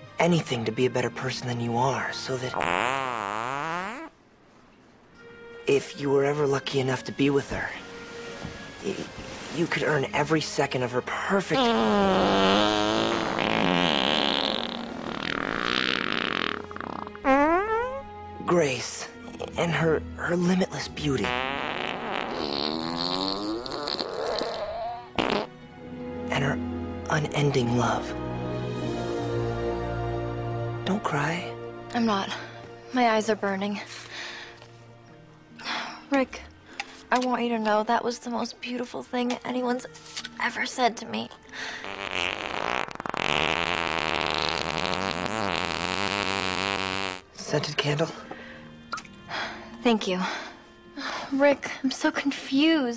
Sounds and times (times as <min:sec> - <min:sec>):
Fart: 0:02.5 - 0:04.2, 0:11.5 - 0:18.1, 0:21.2 - 0:25.5, 0:41.8 - 0:47.4.